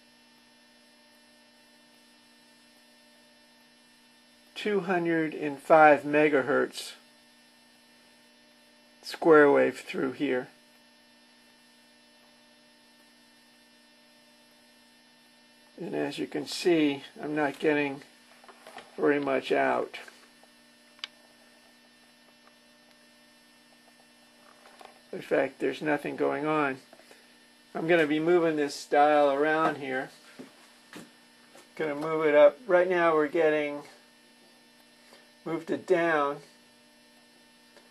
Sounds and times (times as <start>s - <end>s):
Speech: 4.6s - 7.0s, 9.0s - 10.6s, 15.8s - 18.1s, 19.0s - 20.2s, 25.1s - 26.9s, 27.7s - 30.2s, 31.8s - 34.0s, 35.4s - 36.5s.